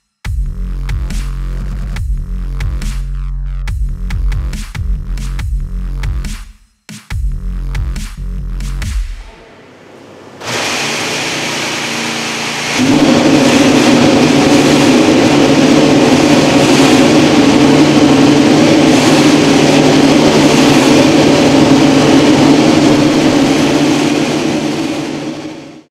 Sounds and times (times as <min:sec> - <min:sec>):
Heavy engine (low frequency): 0:08.9 - 0:25.9.